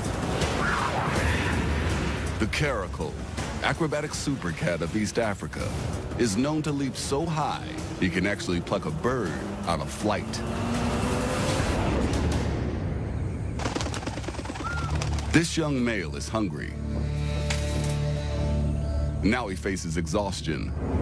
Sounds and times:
Music: 0.0s - 21.0s
Speech: 2.4s - 10.4s, 19.2s - 20.7s.

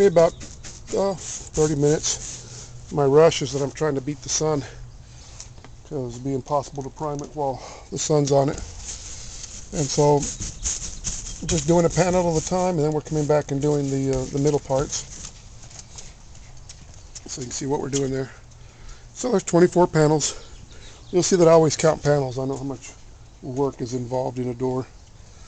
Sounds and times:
Speech: 0.0s - 2.2s, 2.9s - 4.8s, 5.9s - 8.6s, 9.7s - 10.4s, 11.4s - 15.1s, 17.3s - 18.4s, 19.2s - 20.4s, 21.1s - 24.9s.

